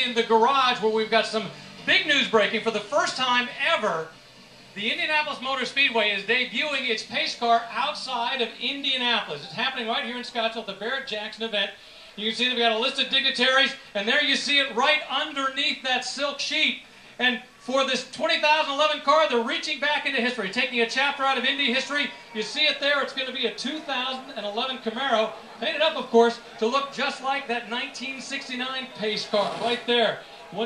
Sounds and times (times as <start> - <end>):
Speech: 0.0 - 4.1, 4.8 - 30.6.